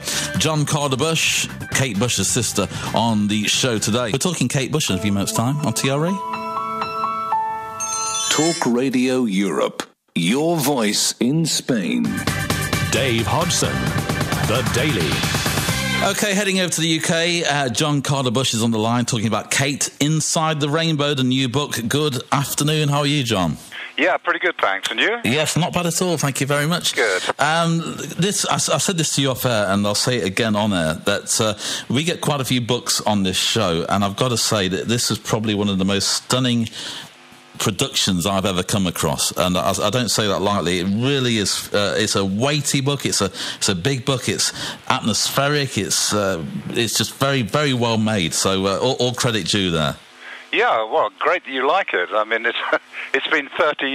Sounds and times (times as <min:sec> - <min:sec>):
Speech: 0:00.0 - 0:06.2, 0:08.4 - 0:12.2, 0:12.9 - 0:13.8, 0:14.5 - 0:15.2, 0:16.0 - 0:36.8, 0:37.6 - 0:53.9
Music: 0:00.0 - 0:08.8, 0:11.9 - 0:16.4.